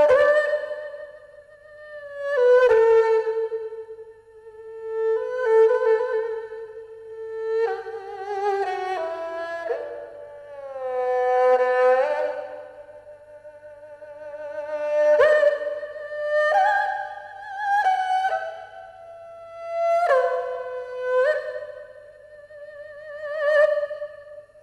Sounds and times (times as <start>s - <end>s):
Music: 0.0s - 24.6s.